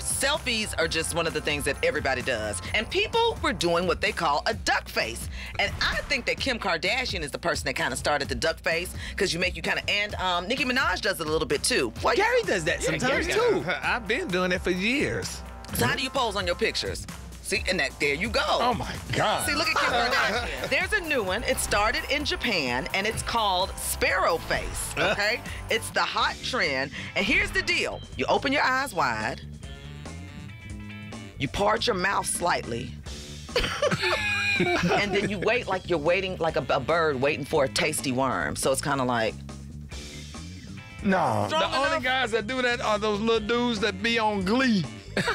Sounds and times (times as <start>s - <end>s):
Music: 0.0s - 45.3s
Speech: 0.2s - 29.4s, 34.8s - 39.3s, 41.0s - 44.9s.